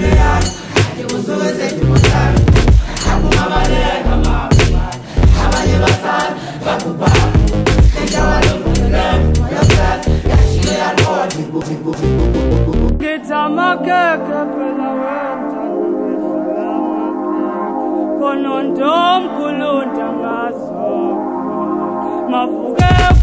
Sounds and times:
Vocal music: 0:00.0 - 0:23.2.

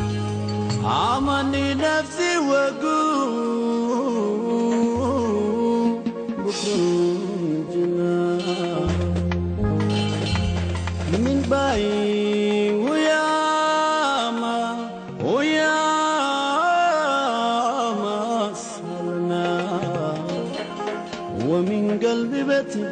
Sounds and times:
Music: 0:00.0 - 0:22.9.

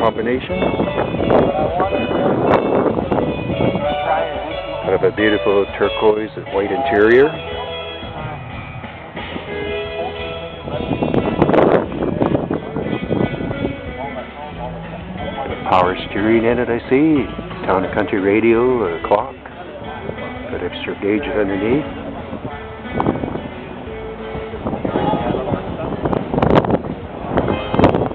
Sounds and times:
Speech: 0:00.0 - 0:00.7, 0:03.8 - 0:08.3, 0:14.0 - 0:22.0
Music: 0:00.0 - 0:28.1.

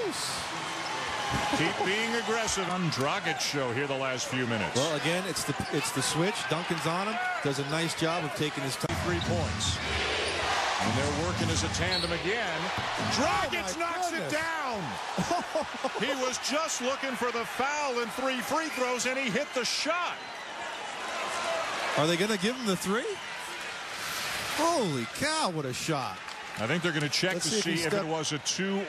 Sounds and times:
Speech: 0:01.6 - 0:09.8, 0:24.6 - 0:28.8.

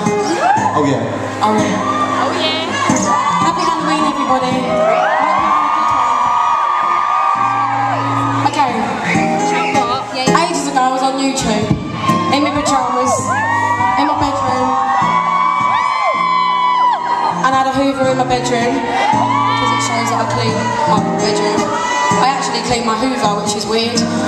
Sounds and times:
Music: 0:00.0 - 0:24.2.

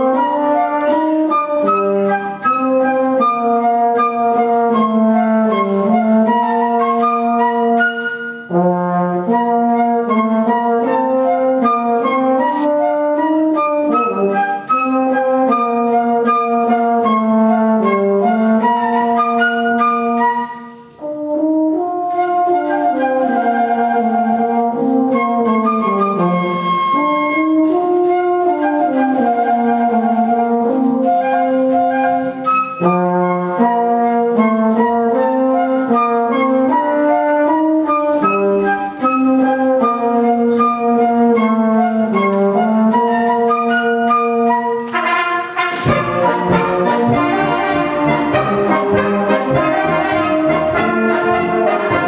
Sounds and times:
Music: 0:00.0 - 0:52.0.

